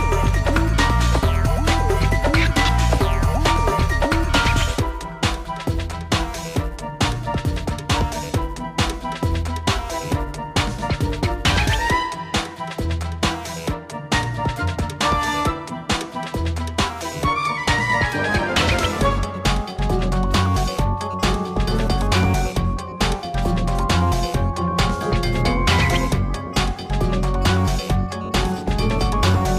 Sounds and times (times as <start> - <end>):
Music: 0.0 - 29.5.